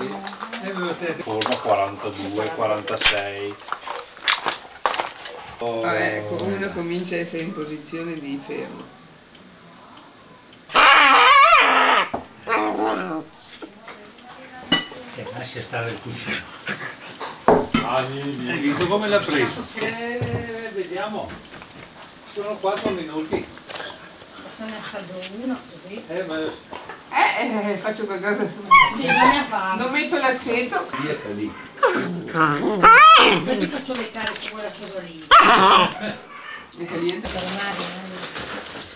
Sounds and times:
Dog: 0:28.7 - 0:29.7, 0:30.9 - 0:33.5, 0:35.3 - 0:37.2.

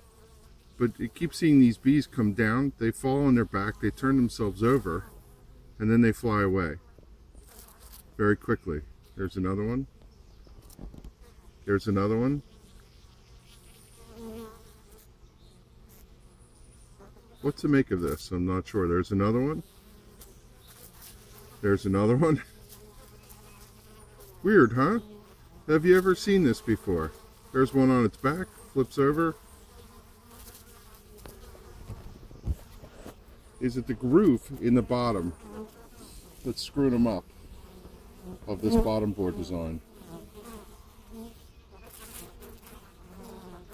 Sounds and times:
Bee, wasp, etc.: 0:00.0 - 0:43.7
Fly, housefly: 0:00.0 - 0:43.7.

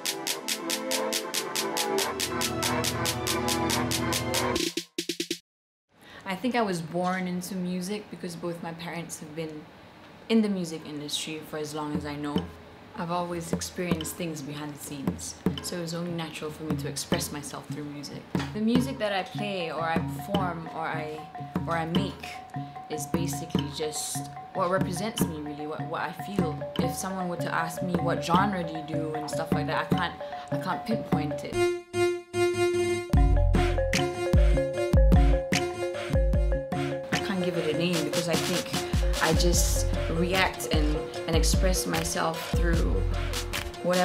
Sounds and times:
Music: 0:00.0 - 0:05.4, 0:13.4 - 0:44.0
Speech: 0:06.3 - 0:09.7, 0:10.3 - 0:31.6, 0:37.2 - 0:43.0, 0:43.8 - 0:44.0.

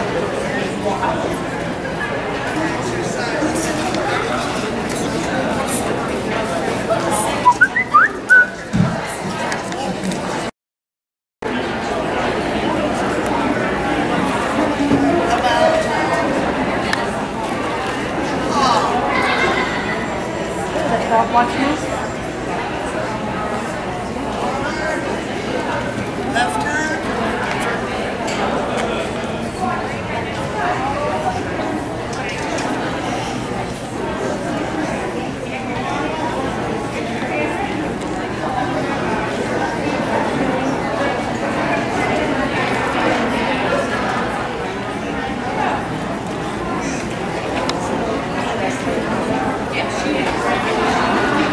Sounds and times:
Speech: 0:00.0 - 0:10.5, 0:11.4 - 0:51.5
Inside, public space: 0:00.0 - 0:10.6, 0:11.4 - 0:51.5.

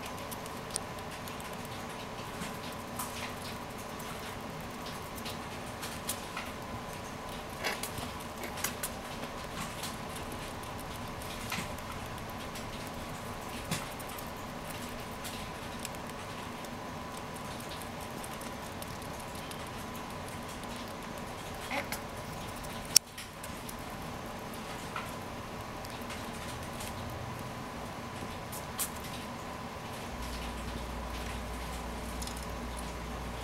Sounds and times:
Patter: 0:00.0 - 0:33.4.

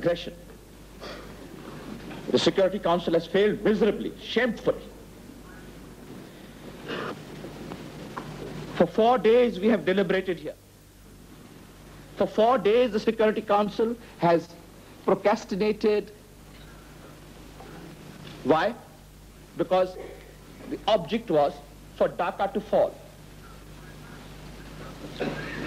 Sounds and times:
Male speech, man speaking: 0:00.0 - 0:00.4, 0:02.3 - 0:04.9, 0:08.8 - 0:10.6, 0:12.2 - 0:16.2, 0:18.4 - 0:18.9, 0:19.6 - 0:24.2
Conversation: 0:02.1 - 0:05.3, 0:08.8 - 0:24.7.

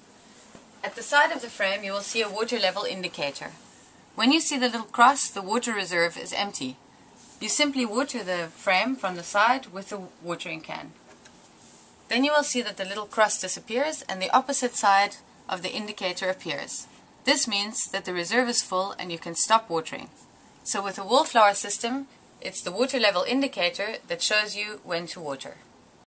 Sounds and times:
Speech: 0:00.8 - 0:03.6, 0:04.2 - 0:06.8, 0:07.4 - 0:11.0, 0:12.1 - 0:25.7.

